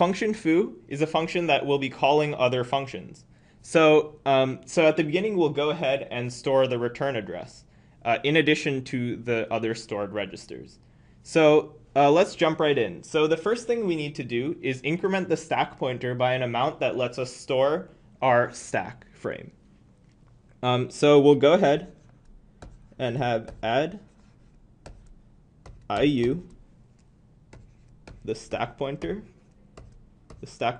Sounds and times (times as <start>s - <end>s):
Speech: 0.0s - 19.6s, 20.6s - 22.0s, 23.0s - 24.1s, 25.9s - 26.6s, 28.2s - 29.4s, 30.3s - 30.7s.